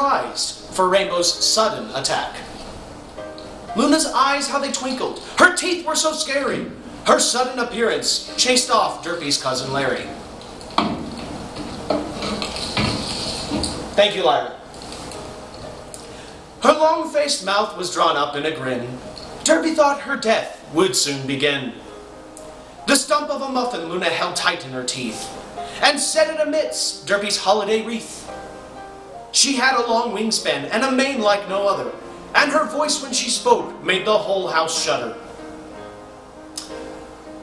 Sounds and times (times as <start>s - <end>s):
Speech: 0.0s - 2.5s, 3.8s - 10.2s, 14.0s - 14.6s, 16.6s - 21.8s, 22.9s - 28.3s, 29.4s - 35.2s
Music: 0.0s - 37.4s.